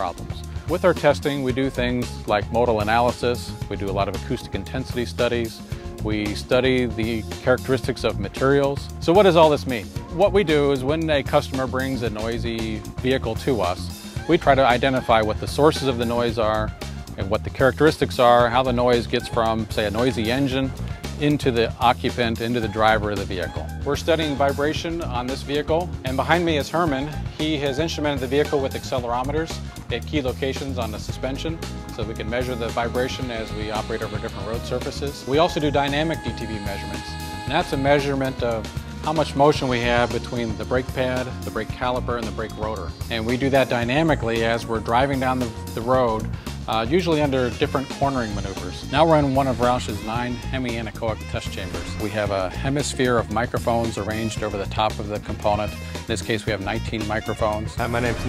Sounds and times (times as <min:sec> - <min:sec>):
Music: 0:00.0 - 0:58.2
Speech: 0:00.0 - 0:58.2.